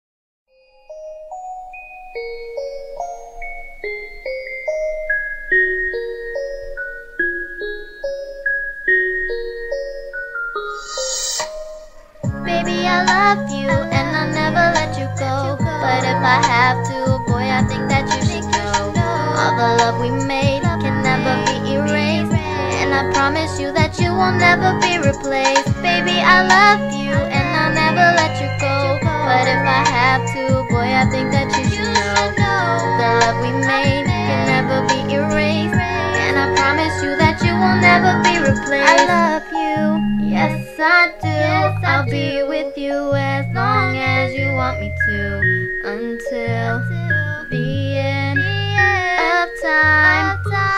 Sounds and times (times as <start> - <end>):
Glockenspiel: 0.5 - 50.7
Marimba, xylophone: 0.6 - 42.8.